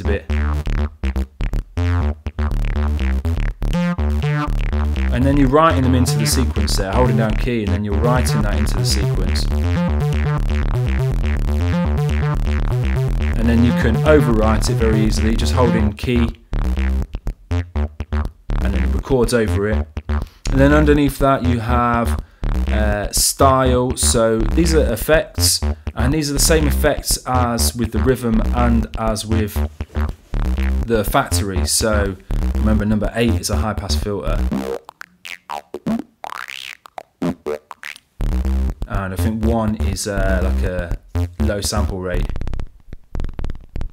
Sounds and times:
Speech: 0:00.0 - 0:00.3, 0:05.1 - 0:09.5, 0:13.4 - 0:16.4, 0:18.6 - 0:19.8, 0:20.5 - 0:29.6, 0:30.8 - 0:34.5, 0:38.9 - 0:42.4
Synthesizer: 0:00.0 - 0:34.8.

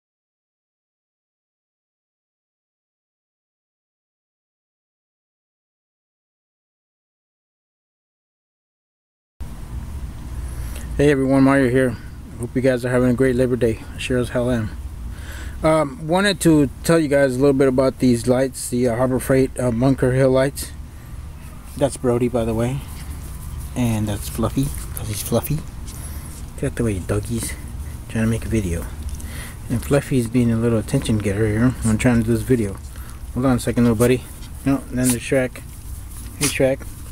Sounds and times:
Speech: 0:11.0 - 0:14.8, 0:15.6 - 0:20.8, 0:21.8 - 0:23.0, 0:23.7 - 0:25.7, 0:26.6 - 0:29.0, 0:29.7 - 0:32.8, 0:33.4 - 0:35.6, 0:36.4 - 0:36.9.

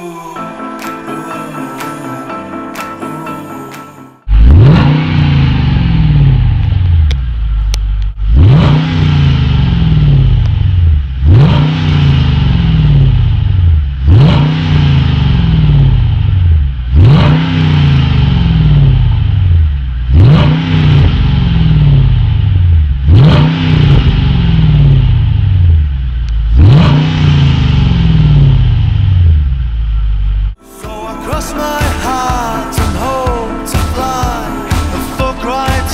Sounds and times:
Music: 0:00.0 - 0:04.3, 0:30.6 - 0:35.9
Accelerating, revving, vroom: 0:04.3 - 0:06.5, 0:08.3 - 0:10.5, 0:11.2 - 0:13.4, 0:14.0 - 0:16.2, 0:16.9 - 0:19.1, 0:20.1 - 0:22.2, 0:23.0 - 0:25.2, 0:26.5 - 0:29.3
Car: 0:04.3 - 0:30.6.

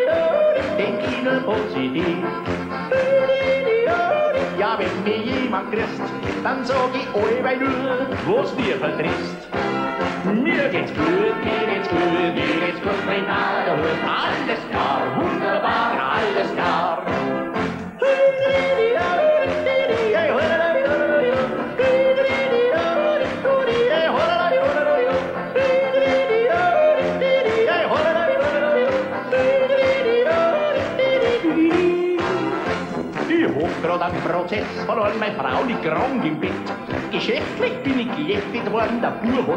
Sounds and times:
Yodeling: 0:00.0 - 0:05.7, 0:18.0 - 0:32.7
Music: 0:00.0 - 0:39.5.

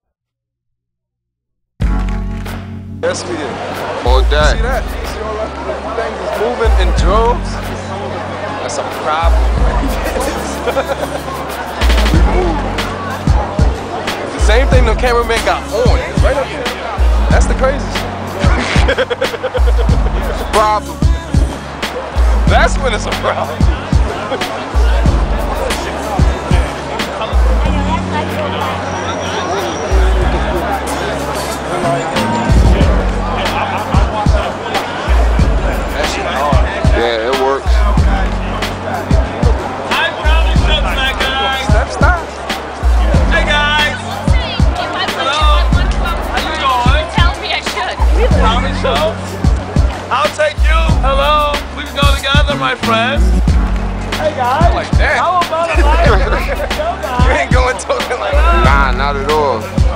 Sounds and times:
Music: 0:01.8 - 0:59.9
Speech: 0:03.0 - 0:10.7, 0:11.3 - 0:18.9, 0:22.4 - 0:53.4, 0:54.1 - 0:59.9.

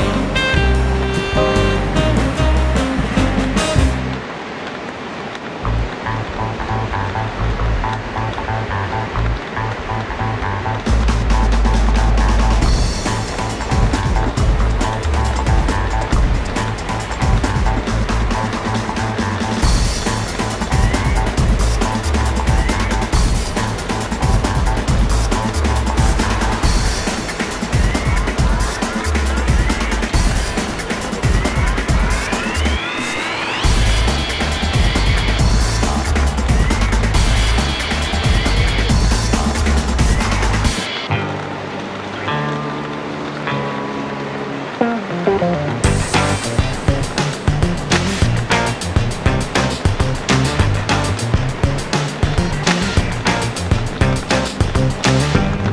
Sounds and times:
Music: 0:00.0 - 0:04.3, 0:05.7 - 0:55.7.

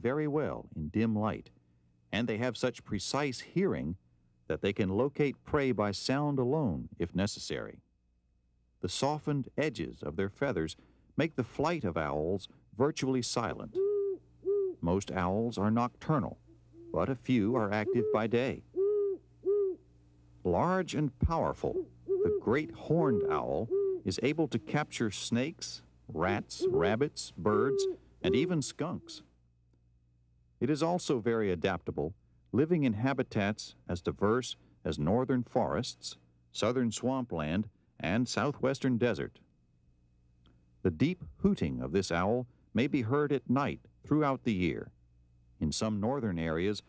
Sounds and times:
Hoot: 0:13.7 - 0:14.8, 0:16.8 - 0:19.8, 0:21.7 - 0:24.9, 0:26.5 - 0:29.2.

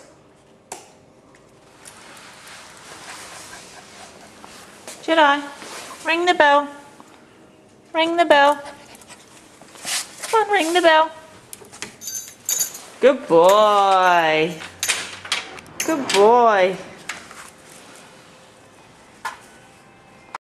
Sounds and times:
Speech: 0:10.3 - 0:11.2, 0:13.0 - 0:14.6, 0:15.9 - 0:16.9.

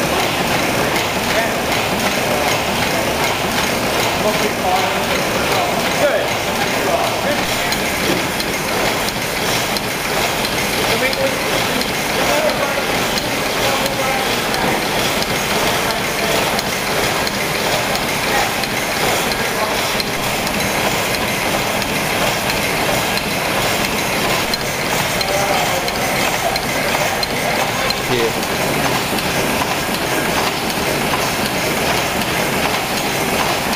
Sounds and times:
Engine: 0:00.0 - 0:33.7
Speech: 0:01.2 - 0:03.4, 0:04.0 - 0:08.0, 0:10.8 - 0:14.9, 0:15.5 - 0:16.7, 0:17.7 - 0:20.4, 0:25.2 - 0:28.5.

